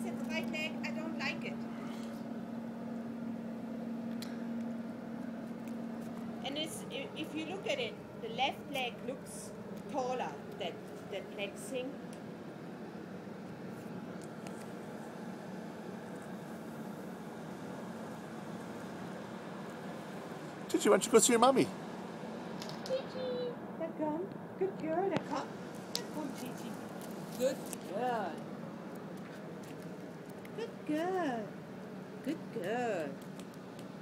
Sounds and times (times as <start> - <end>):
Speech: 20.7 - 21.7, 32.3 - 33.2.